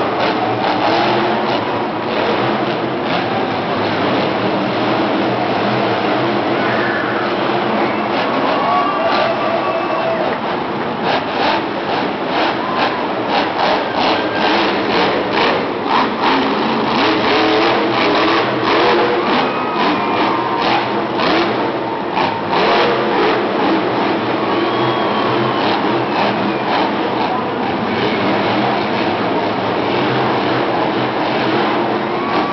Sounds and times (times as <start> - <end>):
Vehicle: 0.0 - 32.5.